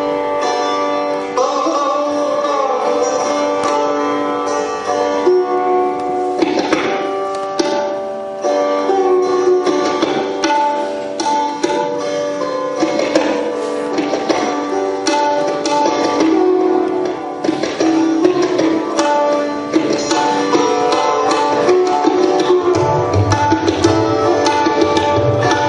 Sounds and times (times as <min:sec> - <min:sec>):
Sitar: 0:00.0 - 0:25.6.